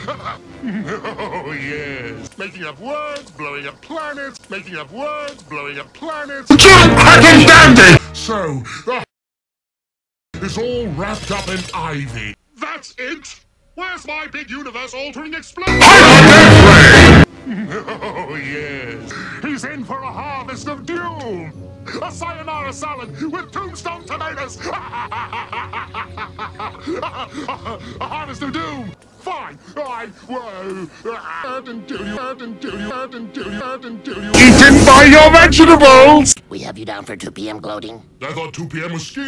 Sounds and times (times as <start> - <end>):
Music: 0.0 - 2.3, 6.5 - 8.6, 15.6 - 29.0, 31.3 - 36.4.